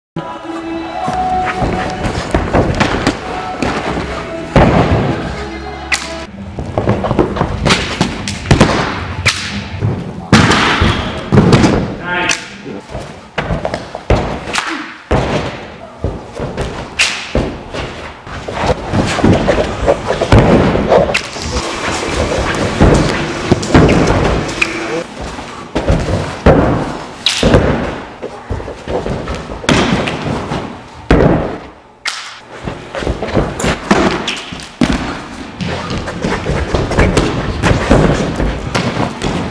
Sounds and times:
Music: 0:00.2 - 0:09.8
Inside, large room or hall: 0:00.2 - 0:39.5.

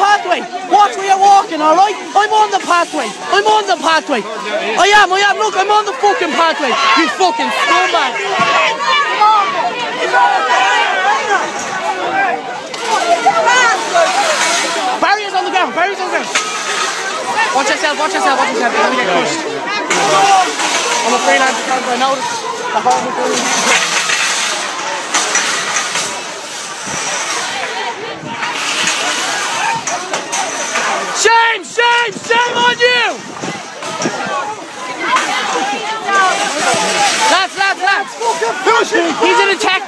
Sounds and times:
Speech: 0:00.0 - 0:24.0, 0:27.2 - 0:39.8.

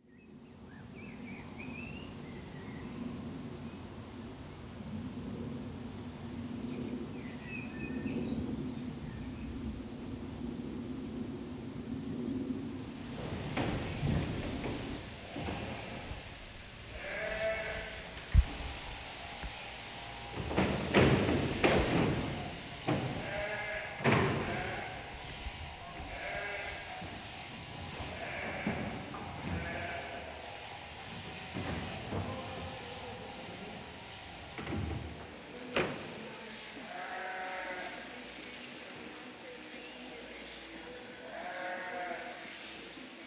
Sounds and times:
Bleat: 0:16.9 - 0:18.2, 0:23.0 - 0:25.1, 0:26.0 - 0:27.2, 0:27.9 - 0:30.4, 0:36.6 - 0:39.2, 0:41.0 - 0:43.0.

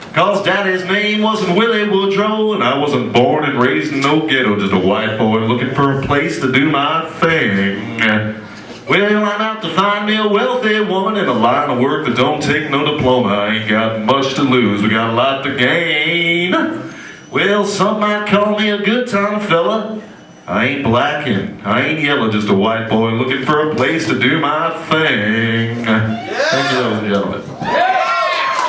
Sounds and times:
Speech: 0:00.1 - 0:27.6.

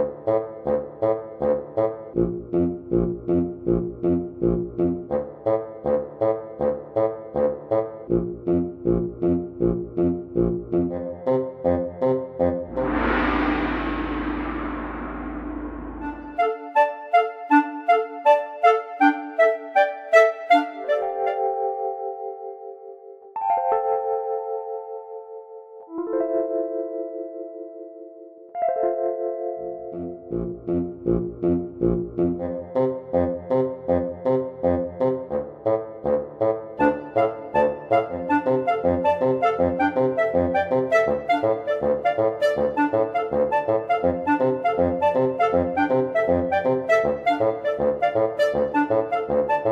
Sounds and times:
Music: 0:00.0 - 0:49.7.

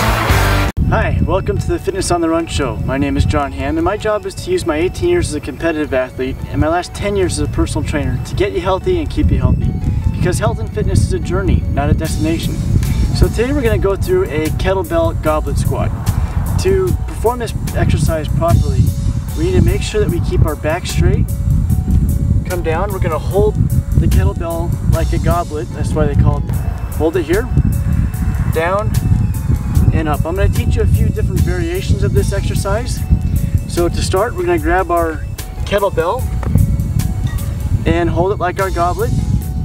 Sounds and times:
Music: 0:00.0 - 0:39.6
Speech: 0:00.9 - 0:09.5, 0:10.2 - 0:12.5, 0:13.2 - 0:15.9, 0:16.6 - 0:18.8, 0:19.4 - 0:21.2, 0:22.5 - 0:26.4, 0:27.0 - 0:27.5, 0:28.5 - 0:28.9, 0:29.9 - 0:33.0, 0:33.7 - 0:36.2, 0:37.9 - 0:39.1.

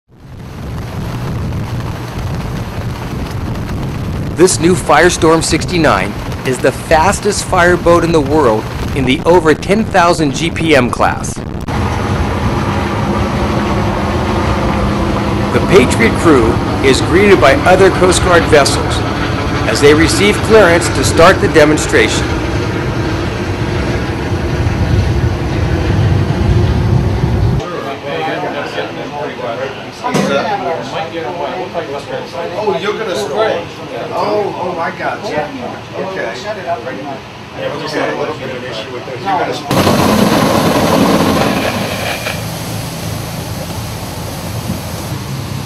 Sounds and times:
Speech: 0:04.4 - 0:11.4, 0:15.5 - 0:22.3, 0:27.6 - 0:39.7.

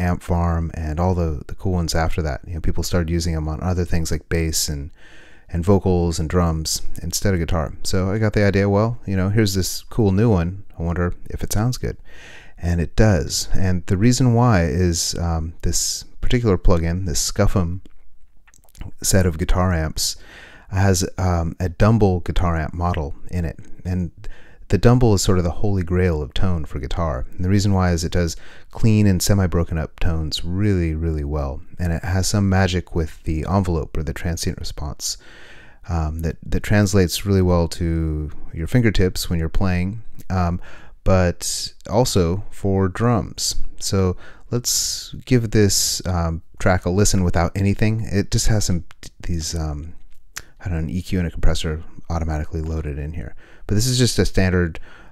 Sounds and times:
Speech: 0:00.0 - 0:12.0, 0:12.6 - 0:17.9, 0:18.7 - 0:35.2, 0:35.9 - 0:54.8.

